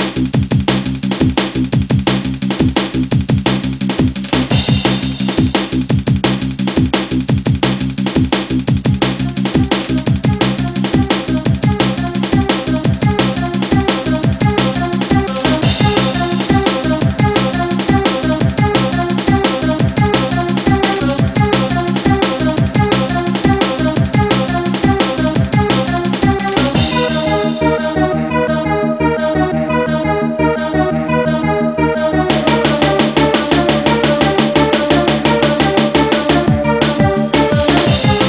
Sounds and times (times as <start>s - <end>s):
Drum and bass: 0.0s - 38.2s.